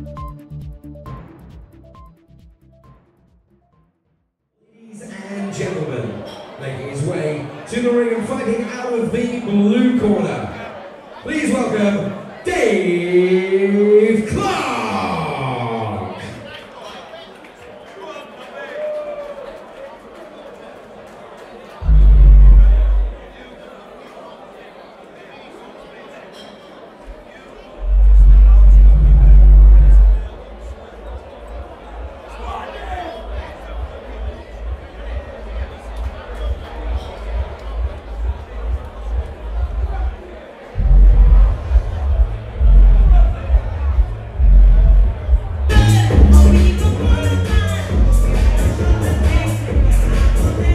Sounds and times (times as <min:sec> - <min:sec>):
Speech: 0:04.7 - 0:50.7.